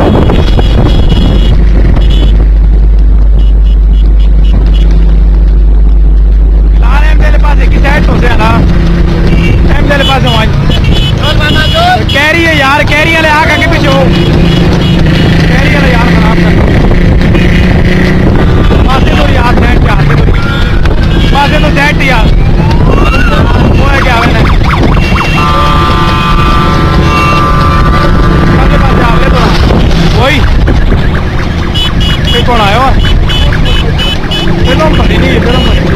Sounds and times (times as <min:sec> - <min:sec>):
Speech: 0:06.8 - 0:08.6, 0:11.2 - 0:14.1, 0:34.6 - 0:35.7.